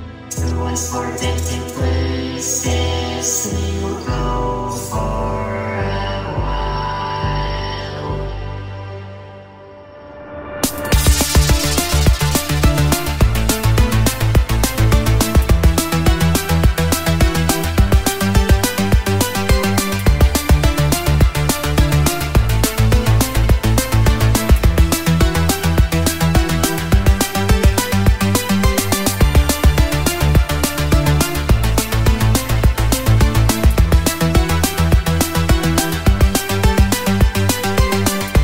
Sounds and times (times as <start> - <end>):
Music: 0.0 - 38.4.